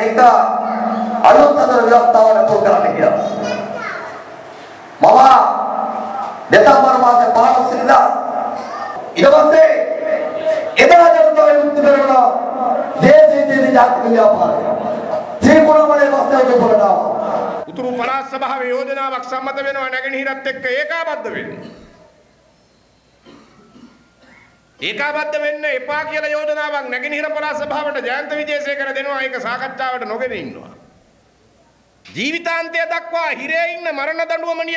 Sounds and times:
Male speech, man speaking: 0.0s - 3.5s, 5.0s - 5.8s, 6.5s - 8.3s, 9.2s - 14.8s, 15.4s - 21.8s, 24.8s - 30.8s, 32.1s - 34.7s
Child speech, kid speaking: 3.1s - 4.3s, 8.6s - 9.0s.

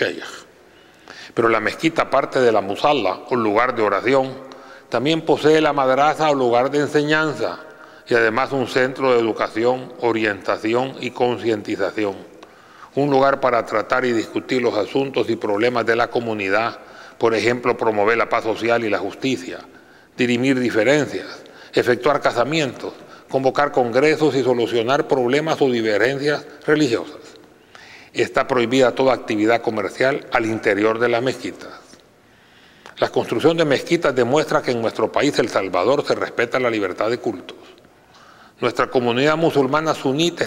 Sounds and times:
Speech: 0.0s - 0.5s, 1.4s - 12.3s, 13.0s - 27.4s, 28.2s - 32.0s, 33.0s - 37.8s, 38.6s - 40.4s.

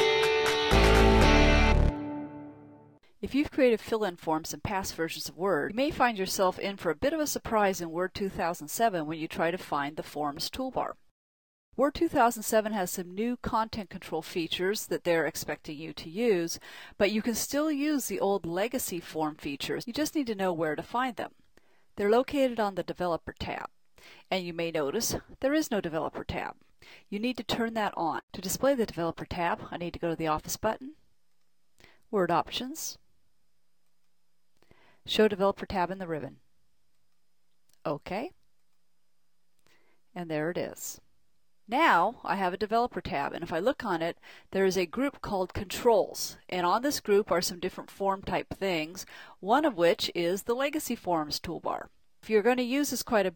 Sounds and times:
Speech: 3.2s - 11.0s, 11.8s - 21.3s, 22.0s - 23.7s, 24.3s - 31.0s, 32.2s - 33.0s, 35.1s - 36.4s, 37.8s - 38.4s, 40.2s - 41.0s, 41.7s - 53.3s.

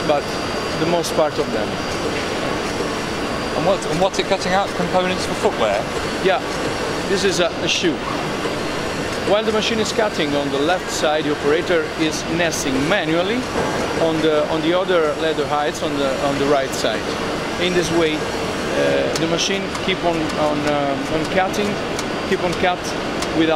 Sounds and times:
Speech: 0.0s - 1.8s, 3.6s - 6.5s, 7.1s - 8.0s, 9.3s - 23.5s.

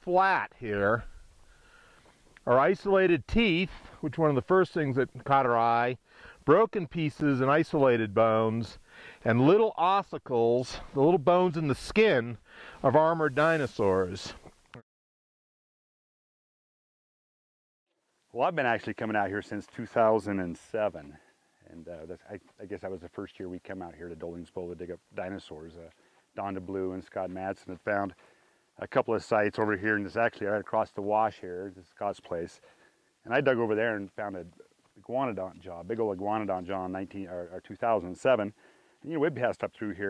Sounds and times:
Speech: 0.0s - 1.1s, 2.4s - 14.5s, 18.3s - 28.2s, 28.8s - 32.6s, 33.2s - 40.0s
Outside, rural or natural: 0.0s - 14.8s, 17.9s - 40.0s.

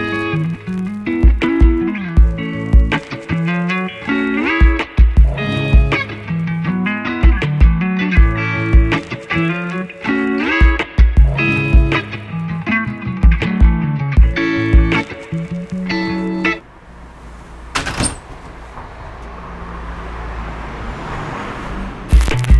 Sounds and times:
Music: 0.0s - 16.6s, 22.1s - 22.5s.

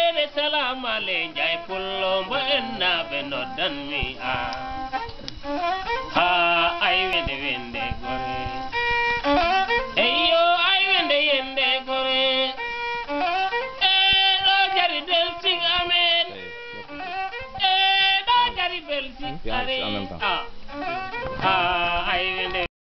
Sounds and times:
Music: 0.0s - 22.7s
Speech: 19.2s - 20.5s.

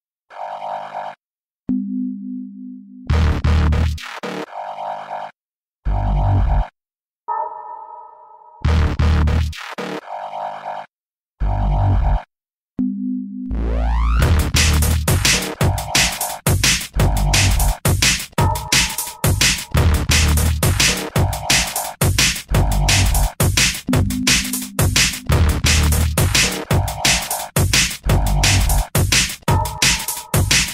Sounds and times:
Music: 3.0s - 4.4s, 8.6s - 9.7s, 13.4s - 30.7s.

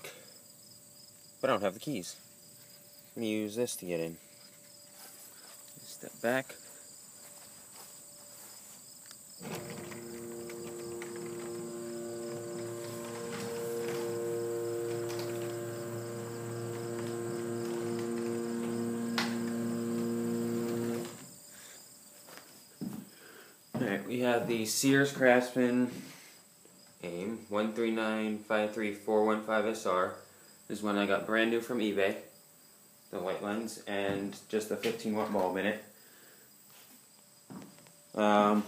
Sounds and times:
Speech: 1.4s - 2.2s, 3.2s - 4.2s, 5.8s - 6.6s, 23.8s - 26.0s, 27.0s - 32.3s, 33.1s - 35.9s, 38.2s - 38.6s.

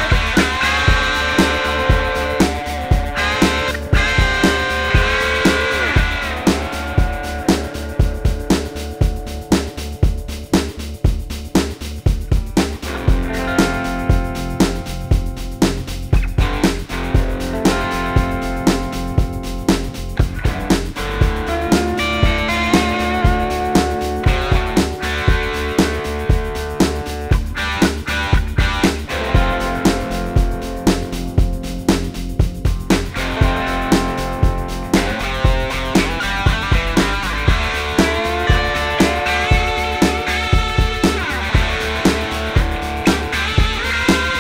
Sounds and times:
Electric guitar: 0.0s - 44.4s.

